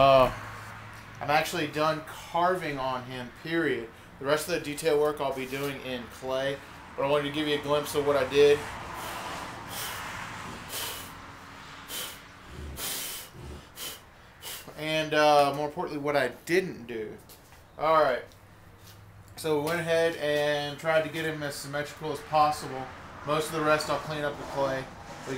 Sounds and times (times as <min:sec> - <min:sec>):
Speech: 0:01.2 - 0:08.6, 0:14.8 - 0:17.2, 0:17.8 - 0:18.3, 0:19.4 - 0:25.3.